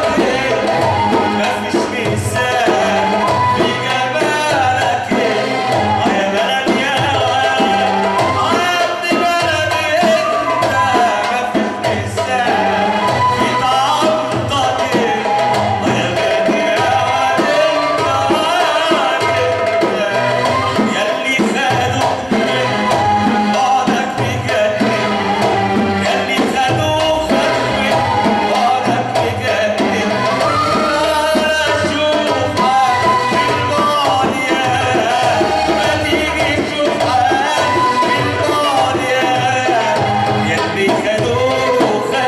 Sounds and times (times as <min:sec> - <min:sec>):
Music: 0:00.0 - 0:42.2.